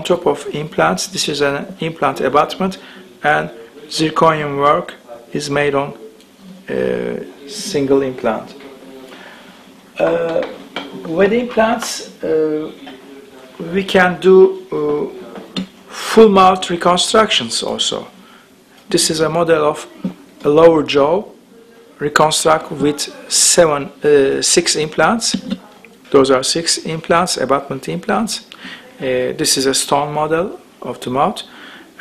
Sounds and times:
Speech: 0.0 - 9.4, 10.0 - 18.2, 18.9 - 32.0.

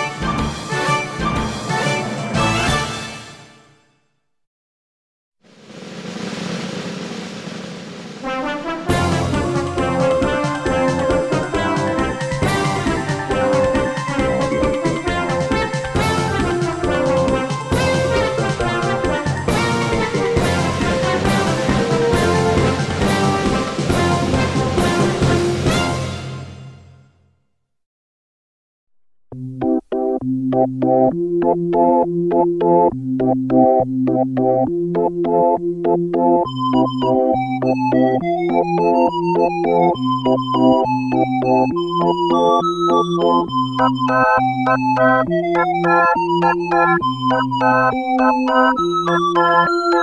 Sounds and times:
Background music: 0.0 - 4.1, 8.2 - 27.3, 29.3 - 50.0.

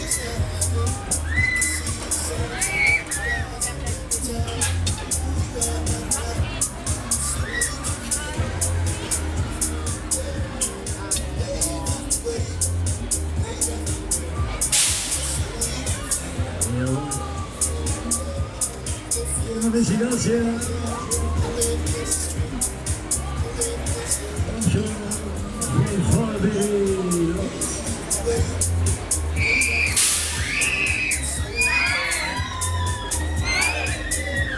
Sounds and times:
Music: 0.0 - 34.5.

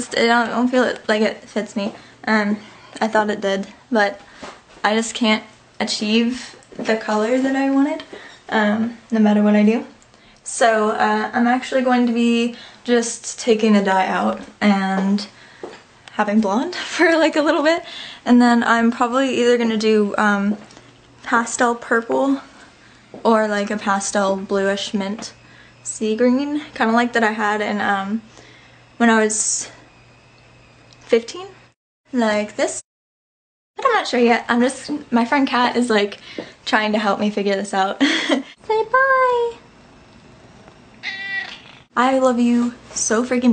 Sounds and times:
Speech: 0.0 - 4.2, 4.8 - 15.4, 16.1 - 20.6, 21.2 - 22.5, 23.2 - 28.3, 29.0 - 29.8, 31.1 - 32.8, 33.8 - 39.6, 42.0 - 43.5
Animal: 41.0 - 41.9.

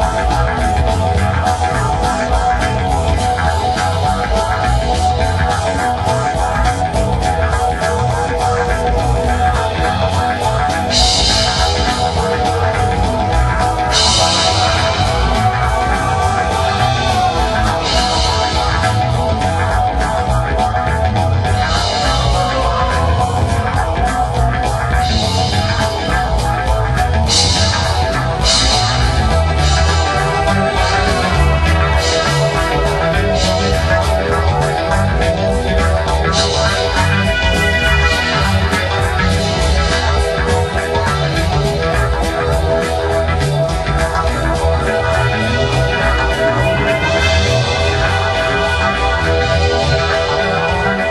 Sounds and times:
Progressive rock: 0.0 - 51.1.

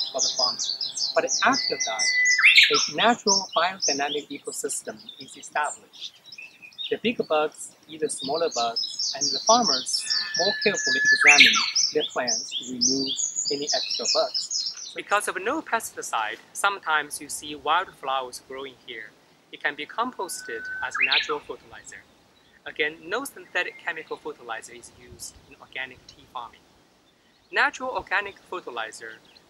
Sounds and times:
Chirp, tweet: 0.0 - 15.0, 20.2 - 22.6.

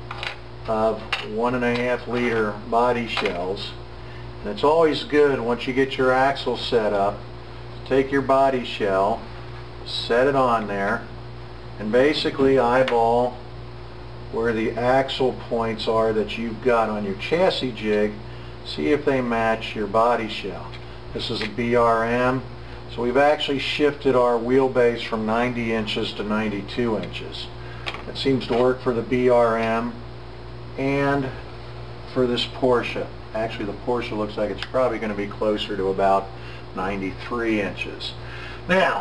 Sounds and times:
Speech: 0.7 - 3.8, 4.4 - 7.2, 7.8 - 11.1, 11.8 - 13.4, 14.3 - 30.0, 30.8 - 31.4, 32.1 - 39.0.

